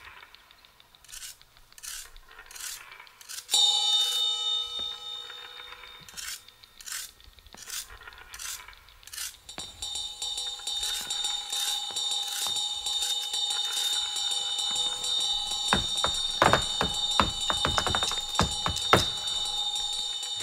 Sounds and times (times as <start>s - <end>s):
Music: 3.6s - 7.0s, 9.6s - 16.0s.